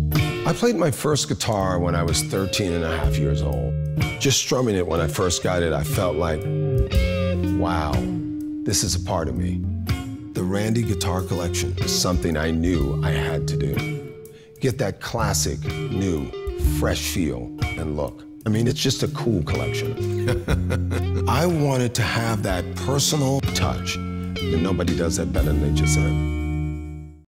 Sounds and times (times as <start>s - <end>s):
Guitar: 0.0s - 27.2s
Speech: 0.4s - 6.4s, 7.6s - 8.1s, 8.7s - 9.6s, 10.4s - 13.8s, 14.6s - 19.9s, 21.3s - 26.2s.